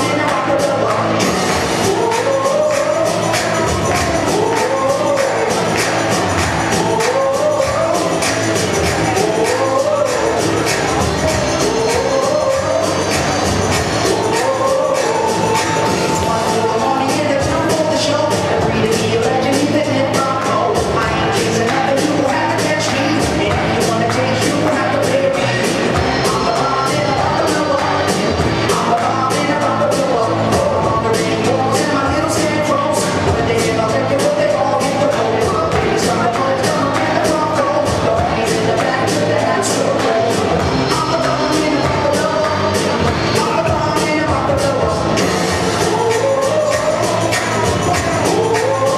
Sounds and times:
Music: 0:00.0 - 0:48.9.

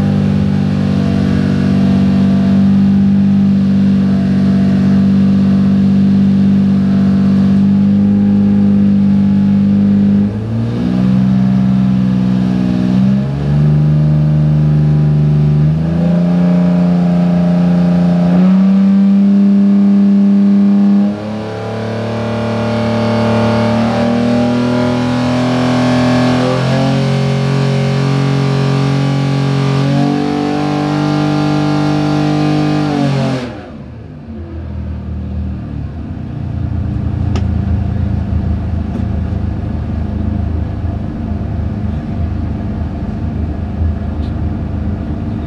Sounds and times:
Accelerating, revving, vroom: 0:00.0 - 0:33.9
Medium engine (mid frequency): 0:00.0 - 0:45.4.

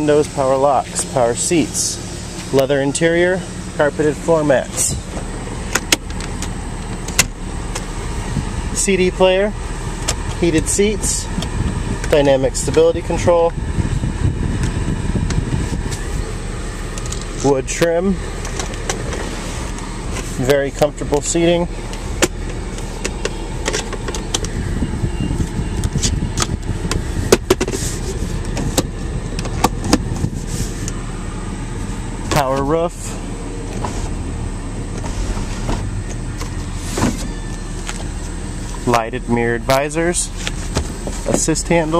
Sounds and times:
Speech: 0:00.0 - 0:05.1, 0:08.7 - 0:09.6, 0:10.4 - 0:11.4, 0:12.1 - 0:13.6, 0:17.4 - 0:18.2, 0:20.4 - 0:21.7, 0:32.3 - 0:33.2, 0:38.8 - 0:40.4, 0:41.2 - 0:41.9.

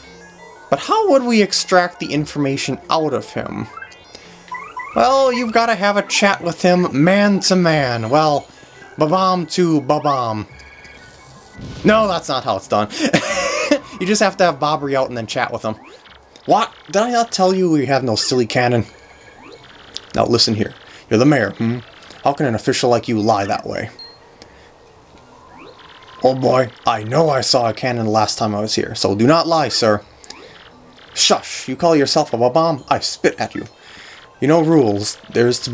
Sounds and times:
Speech: 0:00.7 - 0:03.7, 0:05.0 - 0:08.4, 0:09.0 - 0:10.5, 0:11.8 - 0:12.9, 0:14.0 - 0:15.8, 0:16.5 - 0:18.9, 0:20.1 - 0:23.9, 0:26.2 - 0:30.0, 0:31.2 - 0:33.7, 0:34.4 - 0:35.7.

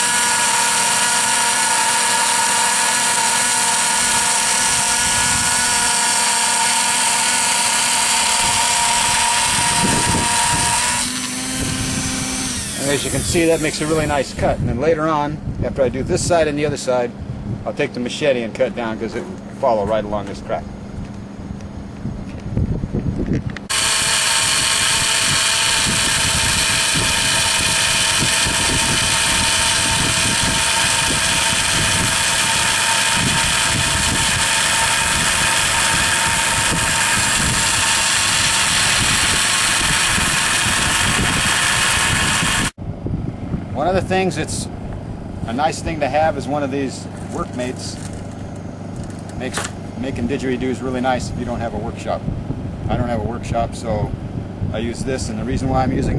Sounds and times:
Speech: 0:12.8 - 0:17.1, 0:17.7 - 0:20.7, 0:43.8 - 0:44.7, 0:45.5 - 0:48.0, 0:49.4 - 0:52.2, 0:52.9 - 0:56.1.

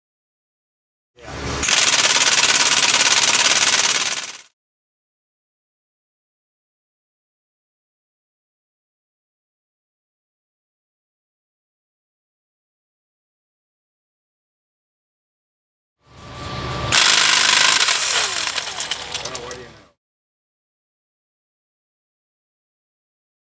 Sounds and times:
Speech: 0:01.2 - 0:01.6, 0:19.2 - 0:20.0.

